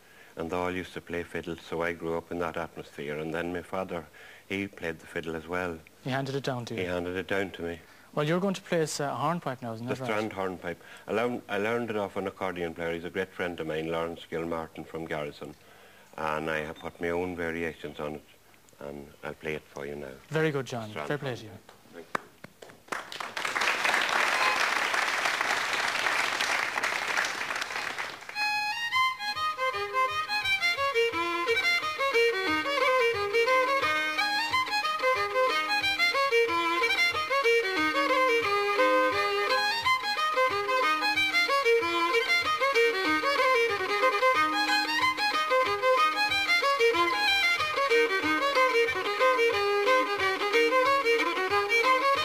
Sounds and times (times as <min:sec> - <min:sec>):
Speech: 0:00.4 - 0:15.5, 0:16.2 - 0:22.1.